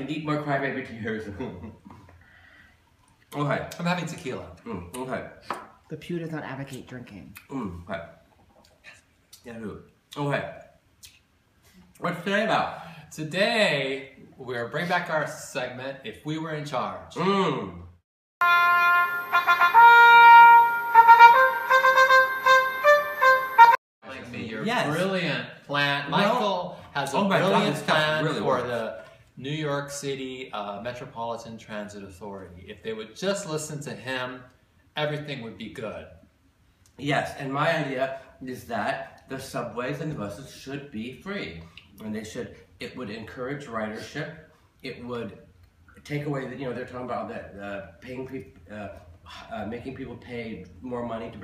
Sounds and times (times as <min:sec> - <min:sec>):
Inside, small room: 0:00.0 - 0:51.4
Wind instrument, woodwind instrument: 0:18.4 - 0:23.8
Speech: 0:24.0 - 0:36.2, 0:46.0 - 0:51.4.